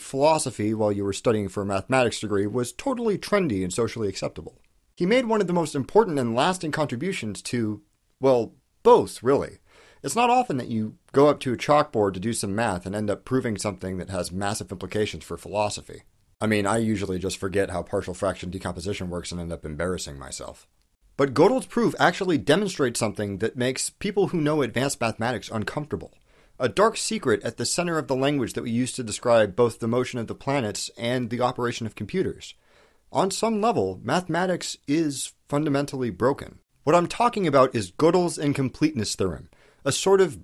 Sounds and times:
Speech: 0.0s - 40.4s.

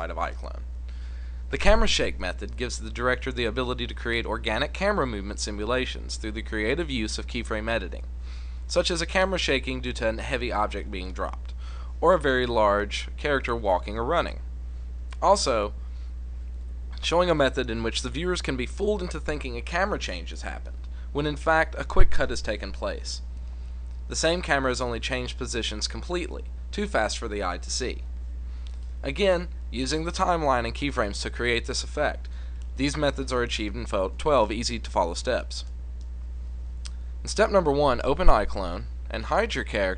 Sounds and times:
Speech: 0.0s - 0.7s, 1.5s - 8.1s, 8.7s - 14.5s, 15.2s - 15.8s, 17.0s - 23.2s, 24.1s - 28.1s, 29.0s - 35.7s, 37.2s - 39.9s.

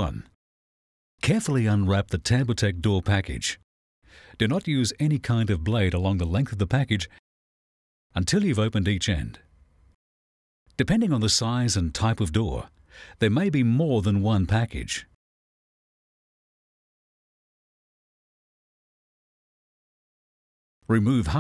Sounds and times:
Speech: 0.0s - 0.4s, 1.2s - 3.6s, 4.4s - 7.2s, 8.2s - 9.5s, 10.8s - 15.2s, 20.9s - 21.4s.

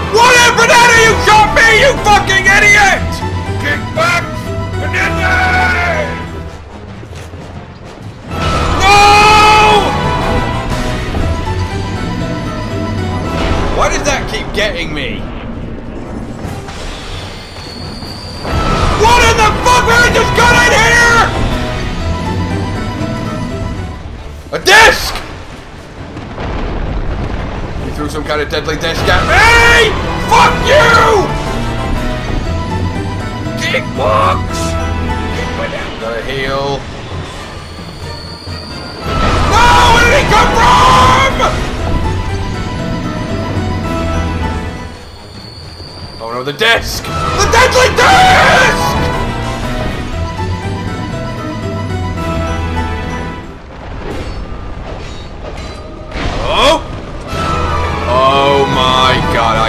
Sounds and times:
Music: 0.0s - 59.6s.

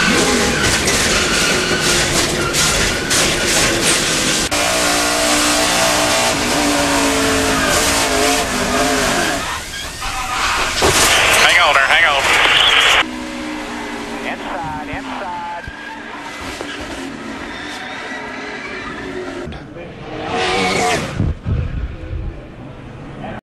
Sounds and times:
Speech: 11.3s - 12.8s, 14.2s - 15.6s.

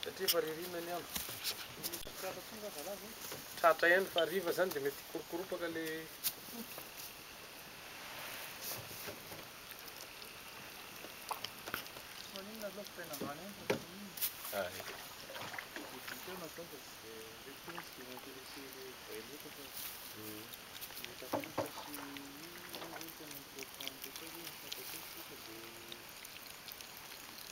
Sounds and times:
Speech: 15.8s - 26.0s.

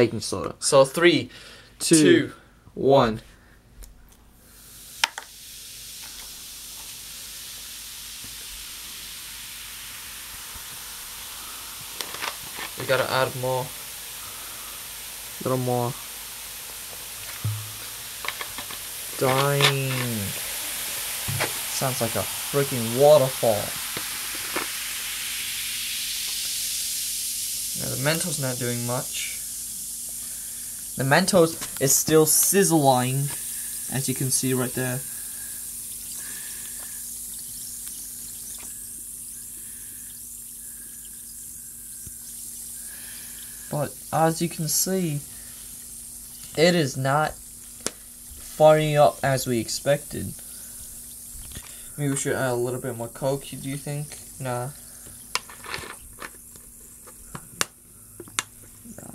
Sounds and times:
Speech: 0.0s - 3.3s, 12.8s - 13.7s, 15.4s - 16.0s, 19.2s - 20.4s, 21.8s - 23.8s, 27.8s - 29.4s, 31.0s - 35.0s, 43.7s - 45.2s, 46.6s - 47.4s, 48.6s - 50.4s, 52.0s - 54.8s
Liquid: 4.7s - 46.7s.

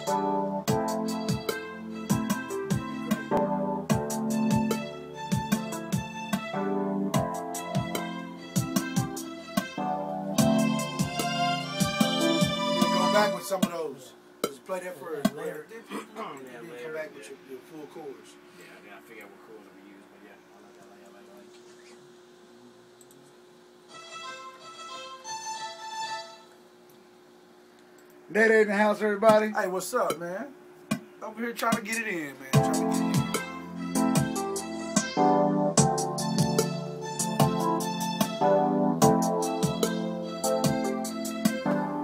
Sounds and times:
Music: 0.0s - 14.6s, 23.9s - 26.6s, 32.5s - 42.0s
Speech: 13.0s - 23.3s, 28.3s - 30.6s, 31.2s - 32.6s.

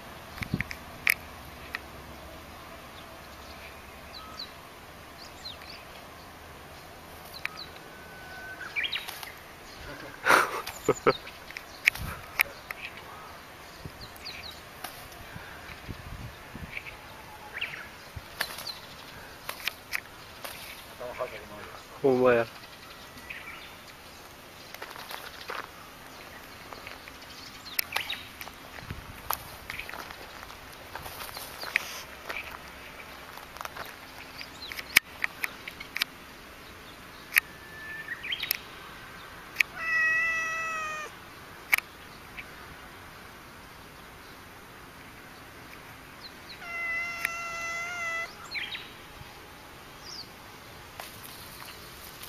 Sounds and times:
Speech: 21.0s - 22.6s.

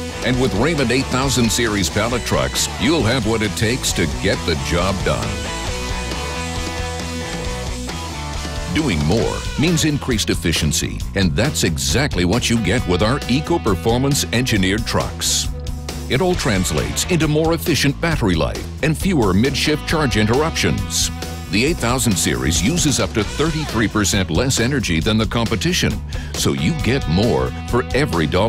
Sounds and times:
Music: 0.0s - 28.4s
Speech: 0.2s - 5.5s, 8.7s - 15.5s, 16.1s - 28.4s.

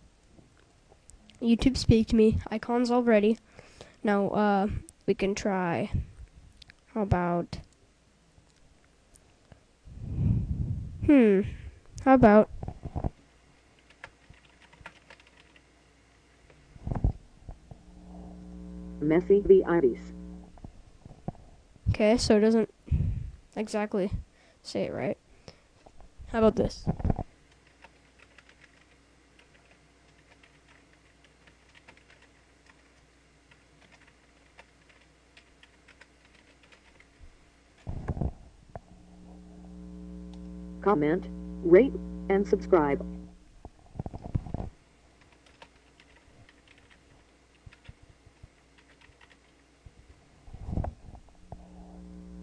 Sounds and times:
Speech synthesizer: 1.4s - 3.4s, 11.1s - 12.5s, 22.0s - 22.7s, 23.6s - 25.2s, 26.3s - 26.9s, 40.9s - 43.0s.

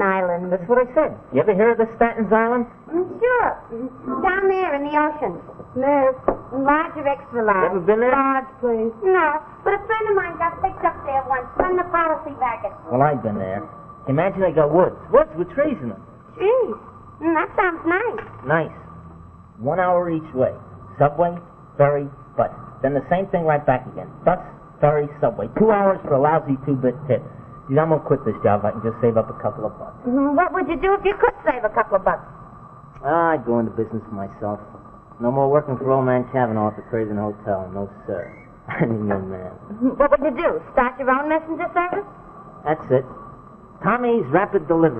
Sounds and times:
Inside, small room: 0.0s - 44.9s.

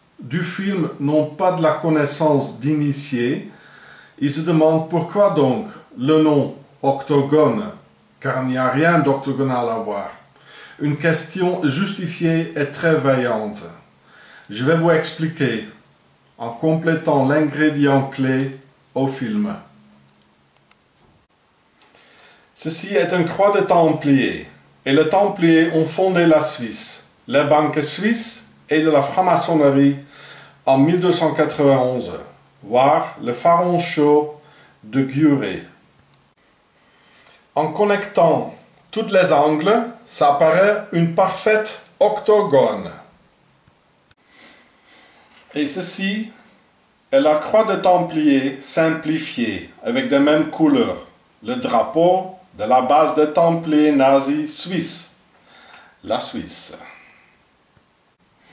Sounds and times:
Speech: 0.2s - 3.6s, 4.2s - 13.9s, 14.5s - 15.8s, 16.4s - 19.8s, 22.6s - 35.8s, 37.6s - 43.1s, 45.5s - 46.4s, 47.1s - 55.2s, 56.0s - 57.0s.

